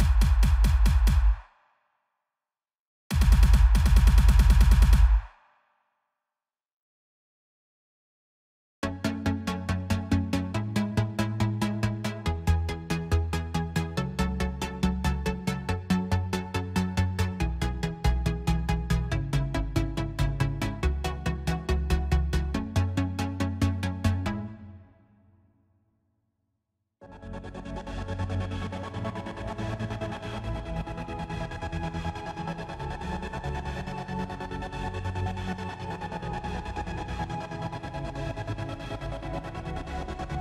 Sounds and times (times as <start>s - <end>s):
Dubstep: 0.0s - 1.4s.